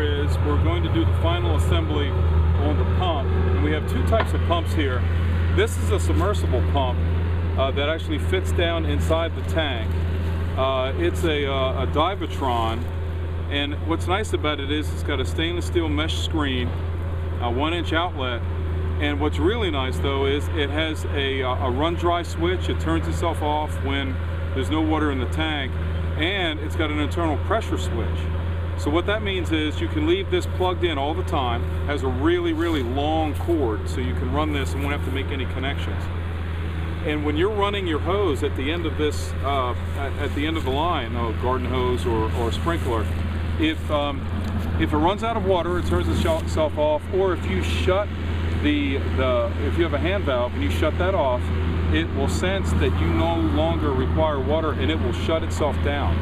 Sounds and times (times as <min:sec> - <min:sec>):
Speech: 0:00.0 - 0:07.0, 0:07.6 - 0:09.9, 0:10.6 - 0:12.9, 0:13.5 - 0:16.8, 0:17.4 - 0:18.4, 0:19.0 - 0:36.1, 0:37.0 - 0:44.2, 0:44.8 - 0:56.2.